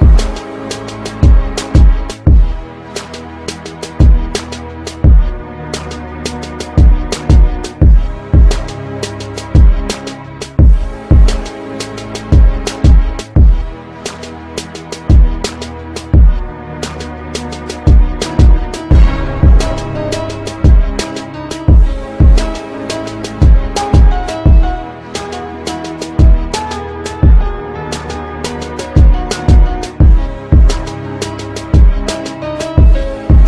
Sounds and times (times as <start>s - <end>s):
Music: 0.0s - 33.4s.